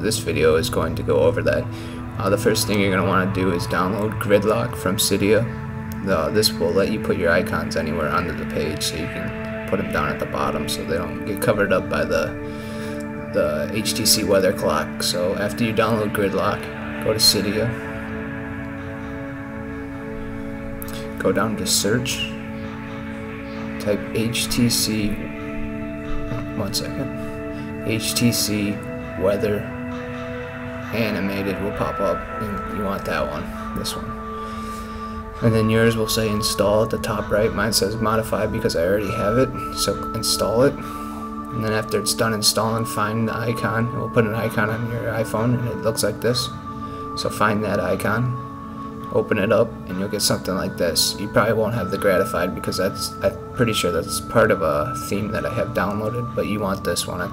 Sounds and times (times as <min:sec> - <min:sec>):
Speech: 0:00.0 - 0:12.4, 0:13.3 - 0:17.8, 0:21.2 - 0:22.4, 0:23.8 - 0:25.3, 0:26.3 - 0:27.1, 0:27.8 - 0:29.7, 0:30.9 - 0:34.1, 0:35.4 - 0:40.8, 0:41.6 - 0:46.6, 0:47.2 - 0:48.4, 0:49.1 - 0:57.3
Music: 0:00.0 - 0:57.3.